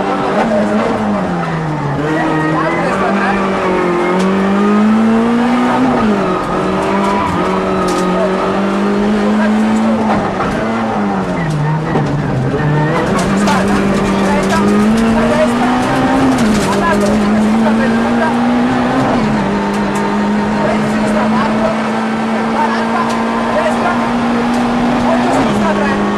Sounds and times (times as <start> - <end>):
Car: 0.0 - 26.1
Speech: 2.0 - 3.5, 9.1 - 10.2, 12.9 - 18.5, 20.5 - 21.8, 22.4 - 26.1.